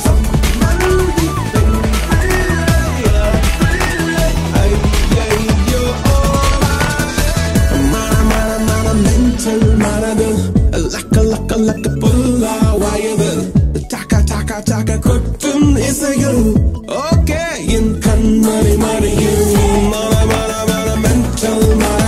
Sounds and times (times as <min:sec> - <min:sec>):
Music of Africa: 0:00.0 - 0:22.0.